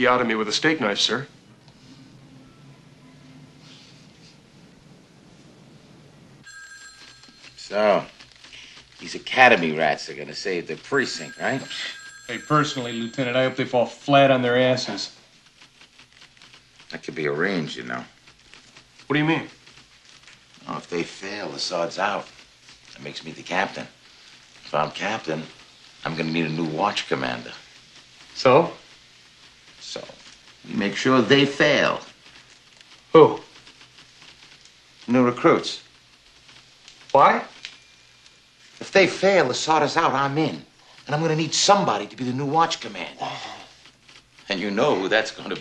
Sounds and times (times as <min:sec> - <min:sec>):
Speech: 0:00.0 - 0:01.3, 0:07.6 - 0:08.1, 0:09.0 - 0:15.2, 0:16.9 - 0:18.1, 0:19.1 - 0:19.5, 0:20.6 - 0:22.3, 0:23.0 - 0:23.9, 0:24.7 - 0:27.6, 0:28.4 - 0:28.8, 0:29.8 - 0:32.1, 0:35.1 - 0:35.8, 0:37.2 - 0:37.6, 0:38.8 - 0:43.7, 0:44.5 - 0:45.6.